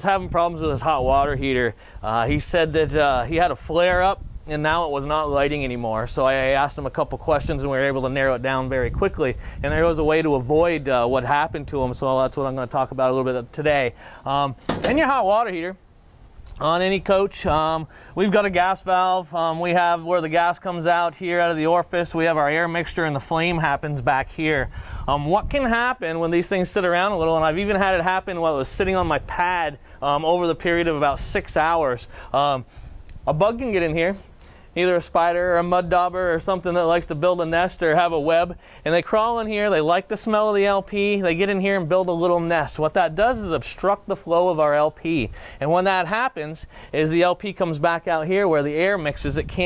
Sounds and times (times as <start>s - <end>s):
Speech: 0.0s - 15.8s, 16.5s - 34.2s, 34.8s - 49.6s.